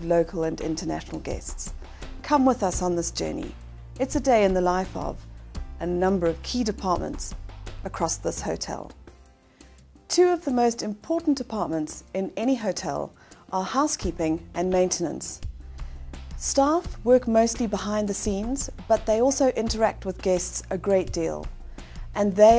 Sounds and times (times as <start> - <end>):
Speech: 0.0 - 5.2, 5.8 - 8.9, 10.1 - 15.4, 16.4 - 21.5, 22.2 - 22.5
Music: 0.0 - 22.5.